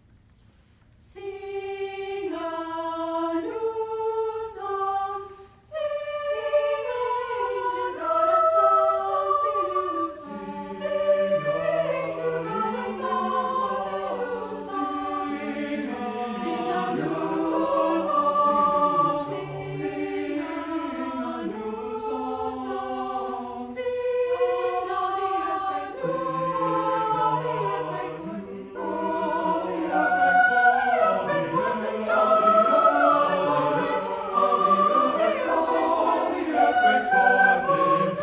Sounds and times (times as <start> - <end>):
Music: 0.0 - 38.2.